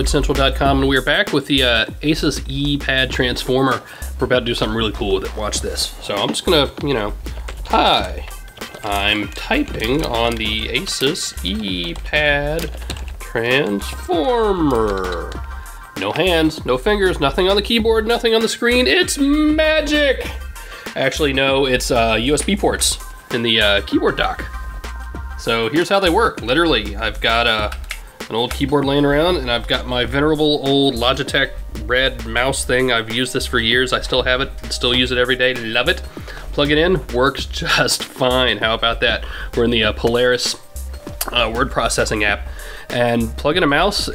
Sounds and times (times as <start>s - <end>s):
Speech: 0.0s - 12.7s, 13.3s - 15.4s, 16.0s - 20.3s, 21.0s - 24.5s, 25.4s - 40.6s, 41.2s - 44.1s
Music: 0.0s - 44.1s.